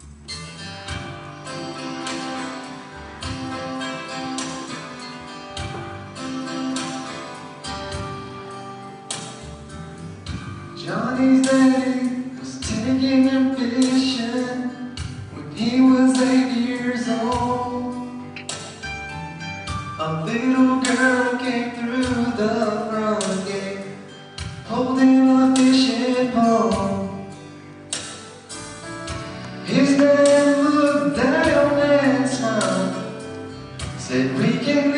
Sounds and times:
Music: 0.0s - 34.9s
Male singing: 10.8s - 18.2s, 20.0s - 24.0s, 24.7s - 27.2s, 29.7s - 33.2s, 34.0s - 34.9s.

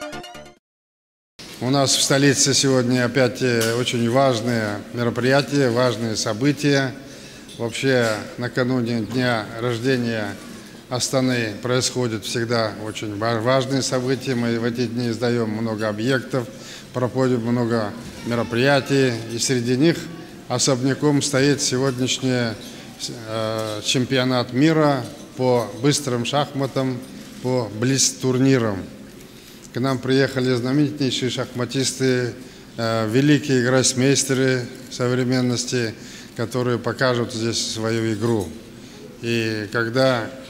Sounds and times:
Narration, monologue: 1.4s - 40.5s
Male speech, man speaking: 1.6s - 29.0s, 29.7s - 38.6s, 39.2s - 40.5s.

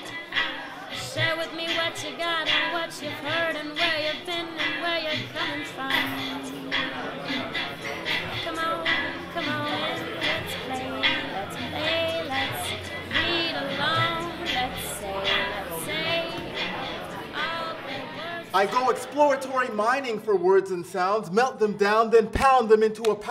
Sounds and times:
Music: 0.0s - 23.3s
Speech: 18.5s - 23.3s.

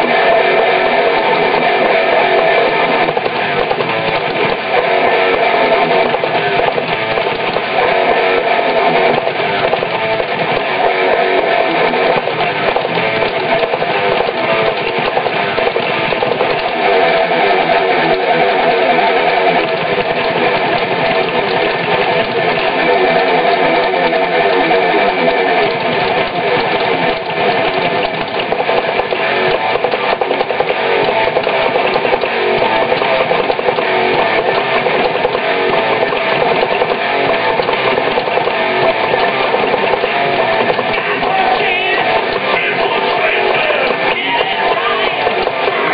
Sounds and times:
Electric guitar: 0.0s - 45.9s.

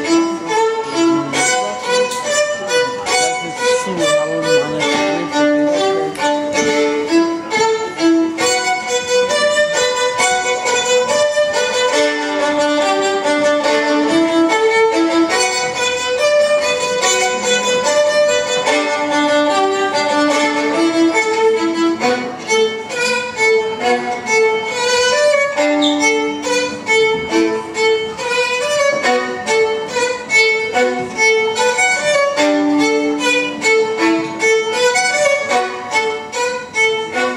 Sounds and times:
Violin, fiddle: 0.0s - 37.3s.

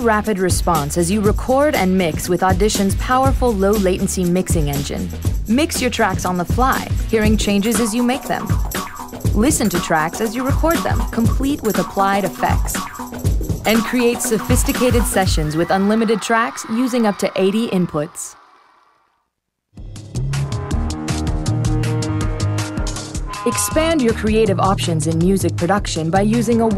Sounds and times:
Speech: 0.0s - 8.5s, 9.4s - 12.8s, 13.7s - 18.4s, 23.5s - 26.7s
Music: 0.0s - 18.4s, 19.7s - 26.7s.

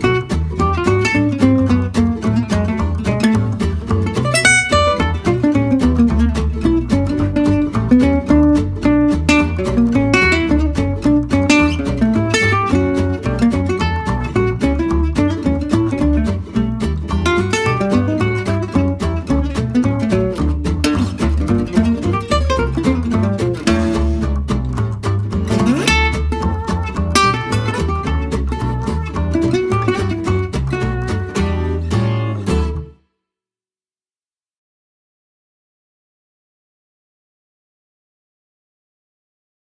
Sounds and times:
Jazz: 0.0s - 32.9s
Acoustic guitar: 0.0s - 33.0s
Strum: 0.0s - 33.0s.

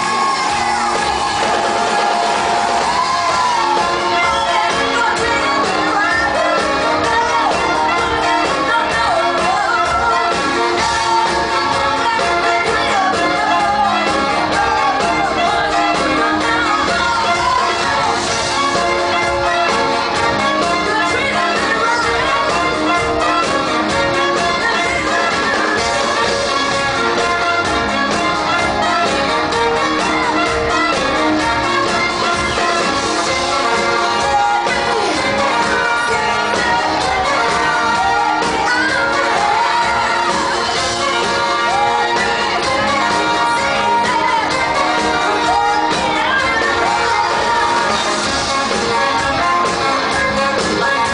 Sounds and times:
Music: 0.0s - 51.1s.

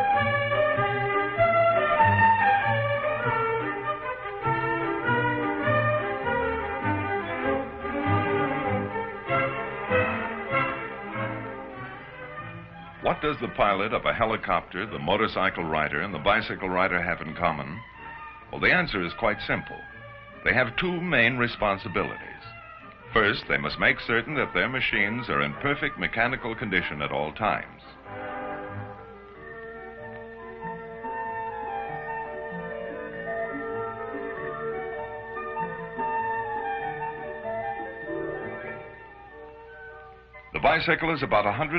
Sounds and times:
Music: 0.0s - 41.7s
Speech: 13.0s - 17.8s, 18.5s - 22.5s, 23.2s - 28.0s, 40.6s - 41.7s.

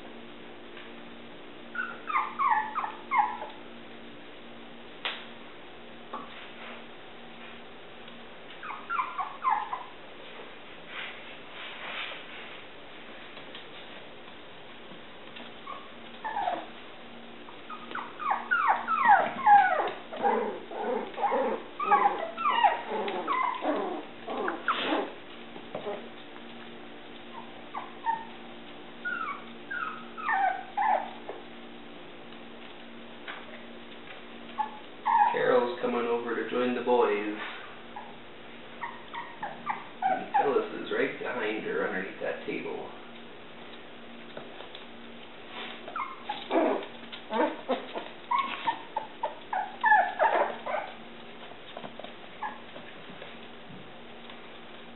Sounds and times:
Inside, small room: 0.0s - 54.9s
Yip: 1.7s - 3.6s, 8.6s - 9.9s, 15.6s - 16.7s, 17.7s - 25.2s, 27.3s - 28.3s, 29.0s - 31.4s, 34.6s - 35.4s, 38.8s - 40.5s, 45.9s - 51.0s.

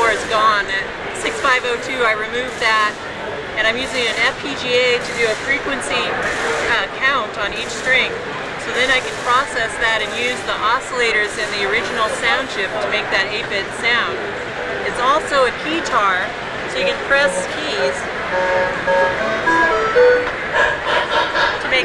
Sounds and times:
Speech: 0.0s - 18.1s, 21.6s - 21.8s.

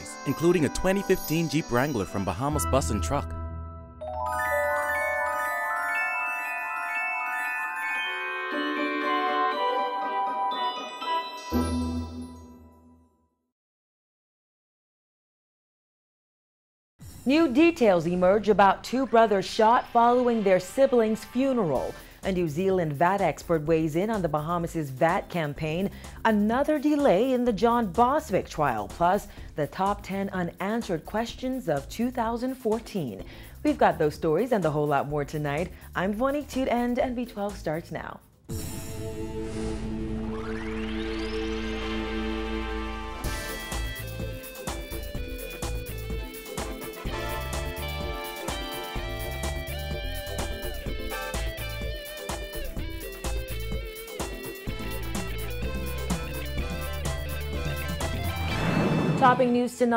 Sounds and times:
Glockenspiel: 0.0s - 3.4s, 4.0s - 13.1s
Marimba, xylophone: 0.0s - 3.4s, 4.0s - 12.8s.

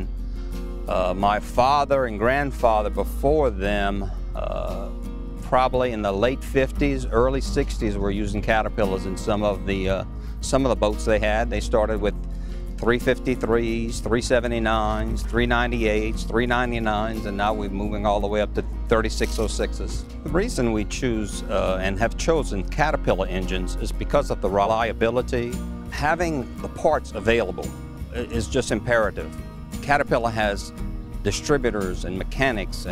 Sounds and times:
Music: 0.0s - 32.9s
Speech: 0.9s - 12.1s, 12.8s - 32.9s.

